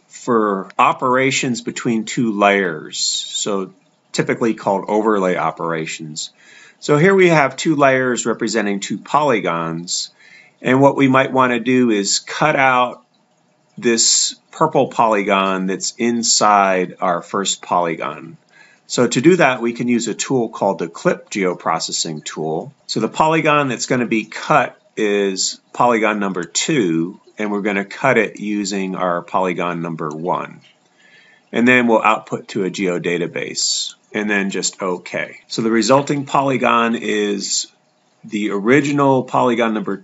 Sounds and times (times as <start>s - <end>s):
Speech: 0.1s - 13.0s, 13.8s - 30.7s, 31.5s - 40.0s.